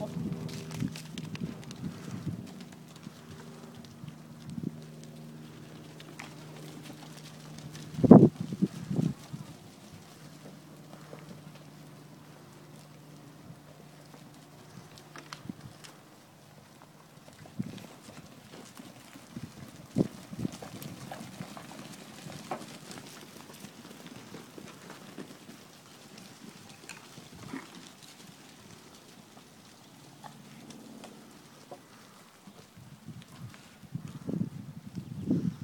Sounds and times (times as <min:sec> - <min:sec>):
Animal: 0:00.0 - 0:34.3.